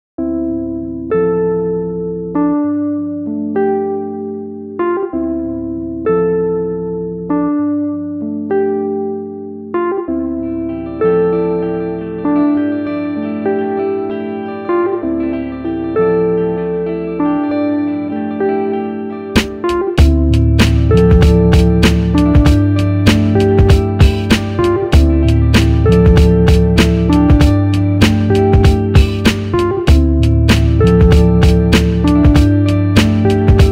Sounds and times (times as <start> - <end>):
Music: 0.2 - 33.7.